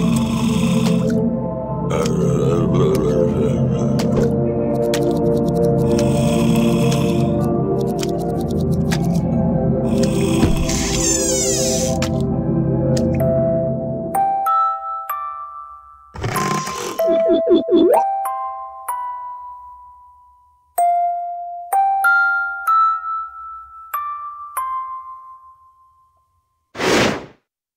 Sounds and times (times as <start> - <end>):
Music: 0.0 - 26.8.